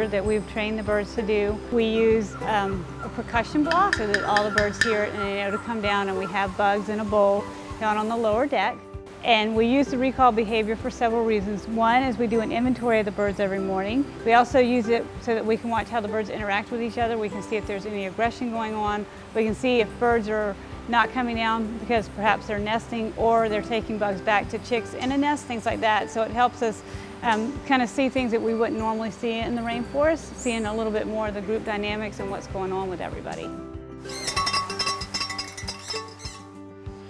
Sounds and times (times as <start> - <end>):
Speech: 0.0 - 33.5
Music: 0.0 - 37.1.